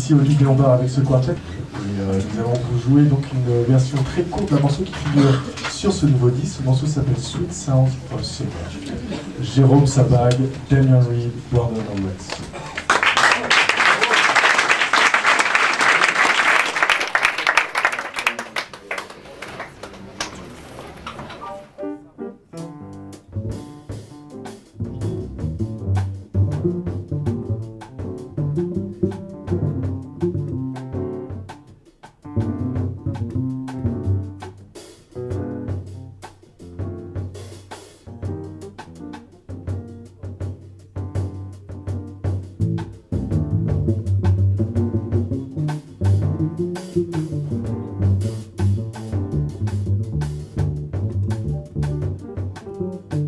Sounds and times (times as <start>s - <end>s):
Music: 0.0s - 13.7s, 21.3s - 53.2s.